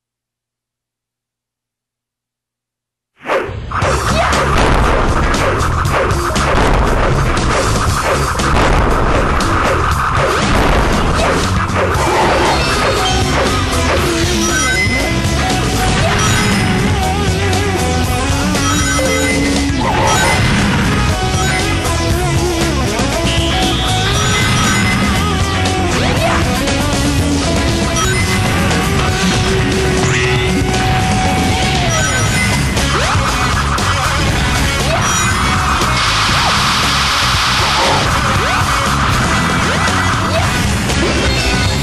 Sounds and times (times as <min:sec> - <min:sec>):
Music: 0:03.5 - 0:41.8.